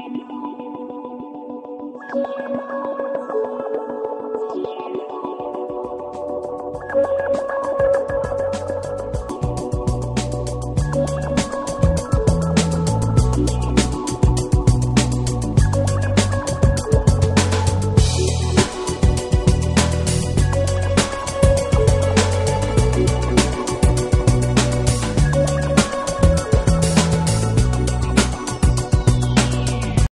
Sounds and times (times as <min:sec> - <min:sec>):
Music: 0:00.0 - 0:30.1.